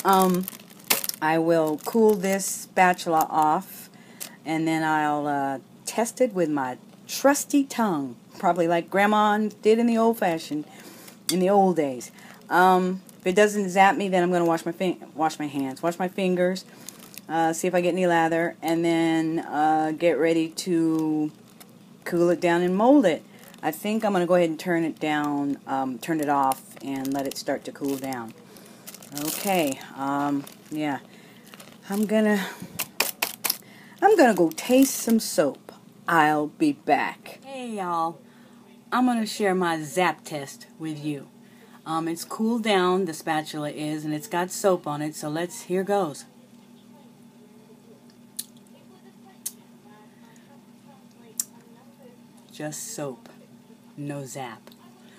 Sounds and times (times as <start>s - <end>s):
Speech: 0.0s - 0.5s, 4.4s - 10.7s, 11.3s - 16.7s, 17.3s - 21.4s, 22.0s - 28.4s, 29.1s - 31.0s, 31.8s - 32.5s, 34.0s - 55.1s.